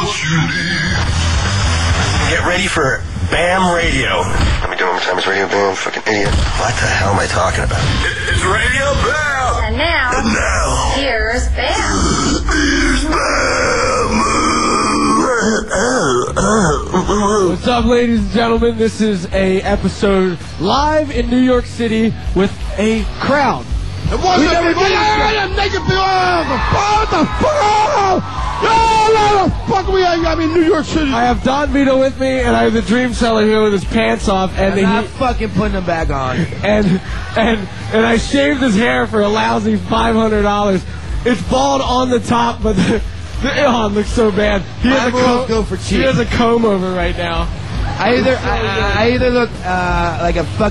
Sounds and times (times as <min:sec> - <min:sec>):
Music: 0:00.0 - 0:50.7.